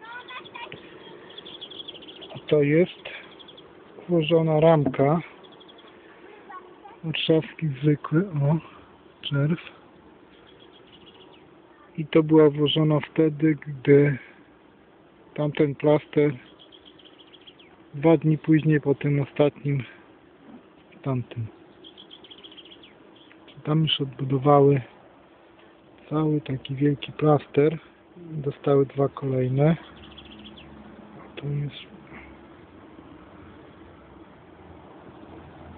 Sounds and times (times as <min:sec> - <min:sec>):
Insect: 0:00.0 - 0:35.7
Speech: 0:02.4 - 0:03.2, 0:04.1 - 0:05.3, 0:06.4 - 0:09.7, 0:11.8 - 0:14.3, 0:15.4 - 0:16.4, 0:18.0 - 0:20.0, 0:21.0 - 0:21.5, 0:23.6 - 0:24.9, 0:26.0 - 0:29.9, 0:31.2 - 0:32.0.